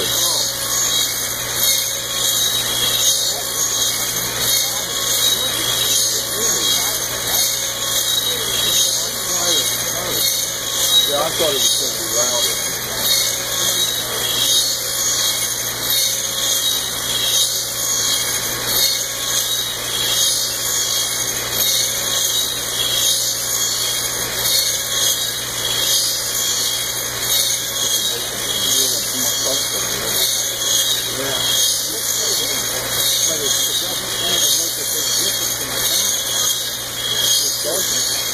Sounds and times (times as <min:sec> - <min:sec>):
Speech: 0:00.0 - 0:00.8, 0:03.0 - 0:03.8, 0:04.4 - 0:15.0, 0:27.6 - 0:38.3.